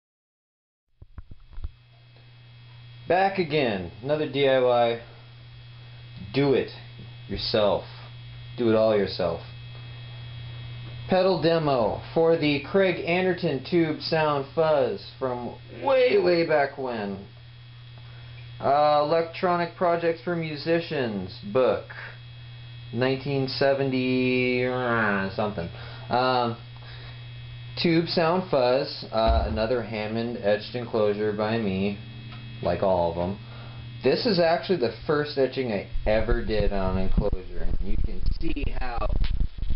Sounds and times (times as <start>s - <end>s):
Speech: 3.1s - 5.1s, 6.2s - 9.5s, 11.1s - 17.3s, 18.6s - 22.2s, 22.9s - 26.6s, 27.8s - 32.0s, 32.6s - 33.4s, 34.0s - 39.2s.